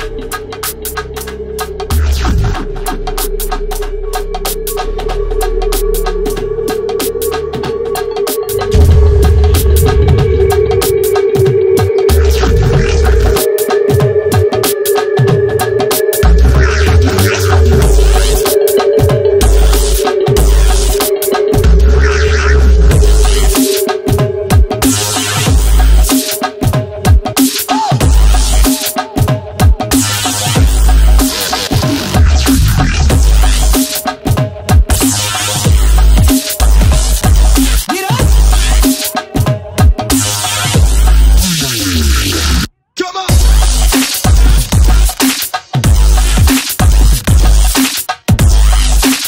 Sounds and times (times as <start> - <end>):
Dubstep: 0.0 - 49.2.